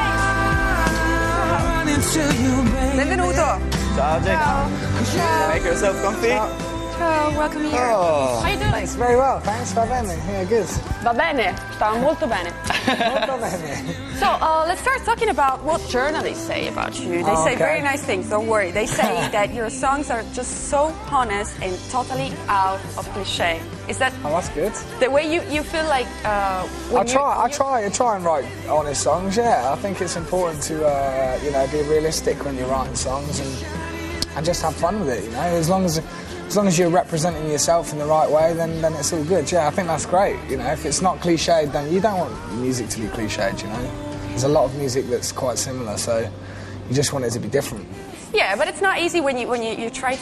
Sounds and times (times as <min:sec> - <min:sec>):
Rhythm and blues: 0:00.0 - 0:46.2.